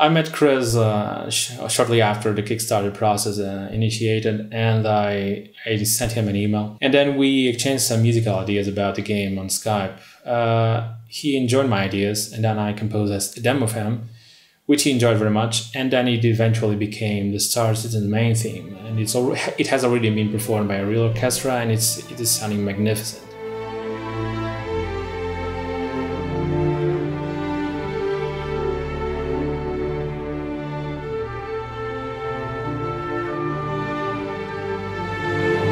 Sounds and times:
Music: 0.0 - 3.2, 17.6 - 35.7
Speech: 0.0 - 14.1, 14.7 - 23.3.

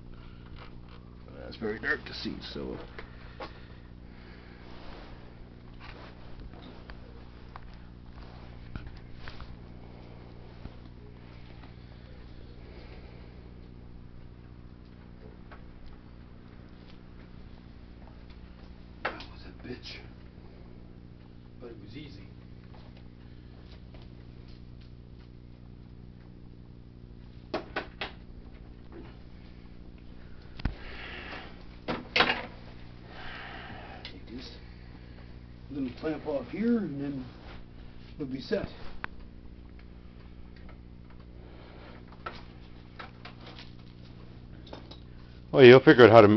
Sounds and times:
Speech: 1.3 - 2.9, 19.1 - 20.2, 21.6 - 22.3, 34.1 - 34.6, 35.7 - 37.4, 38.2 - 38.9, 45.5 - 46.3.

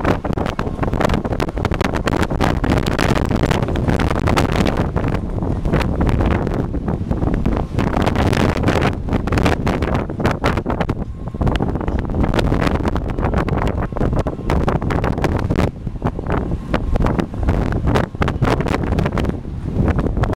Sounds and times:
Wind noise (microphone): 0.0 - 20.3.

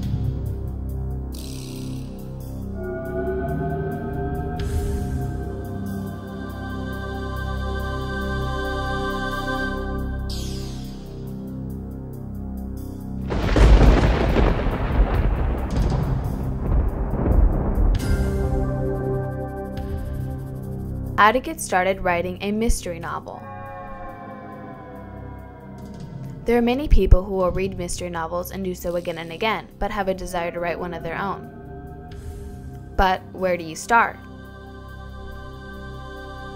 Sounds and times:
Music: 0.0 - 36.5
Speech: 21.2 - 23.4, 26.5 - 31.5, 33.0 - 34.2.

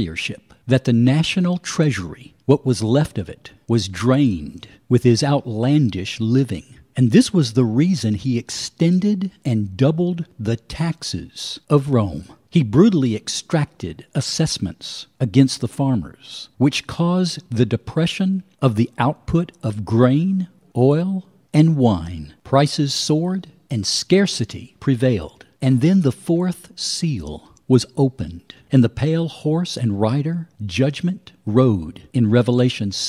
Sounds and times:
Speech: 0.0 - 33.0.

